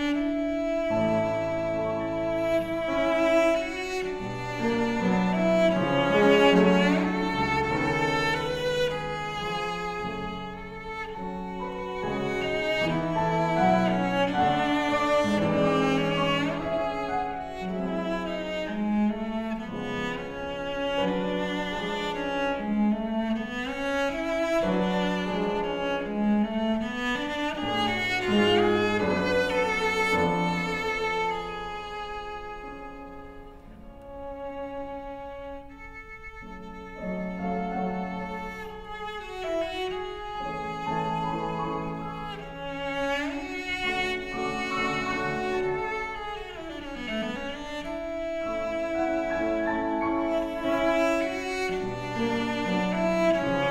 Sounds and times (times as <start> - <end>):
Music: 0.0 - 53.7.